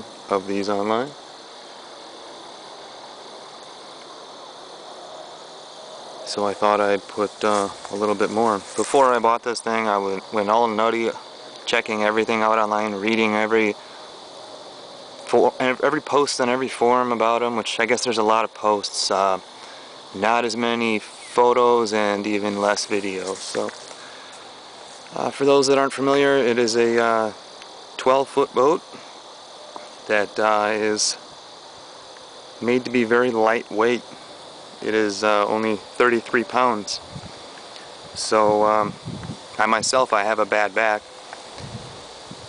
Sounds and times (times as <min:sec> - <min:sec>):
Speech: 0:00.0 - 0:01.2, 0:06.2 - 0:13.8, 0:15.2 - 0:19.4, 0:20.1 - 0:23.8, 0:25.1 - 0:27.4, 0:28.0 - 0:29.0, 0:30.0 - 0:31.2, 0:32.6 - 0:34.2, 0:34.8 - 0:37.1, 0:38.2 - 0:39.0, 0:39.6 - 0:41.0.